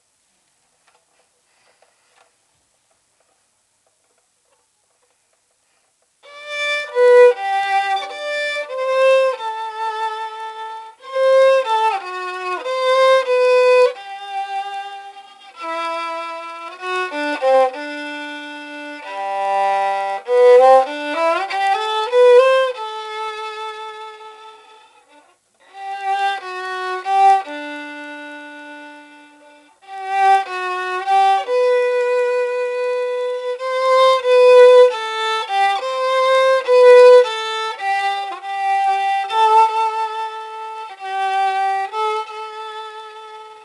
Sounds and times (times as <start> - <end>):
Violin, fiddle: 6.2 - 43.6.